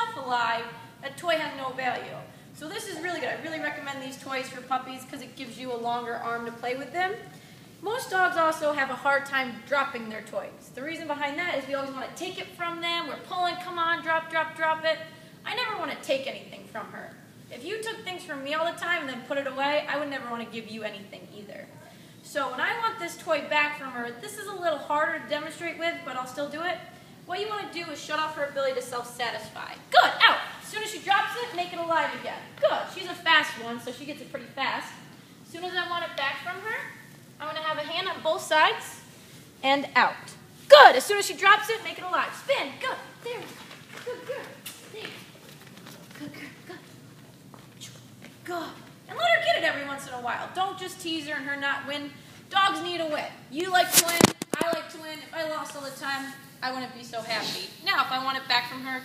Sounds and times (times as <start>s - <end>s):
Speech: 0.0s - 45.2s.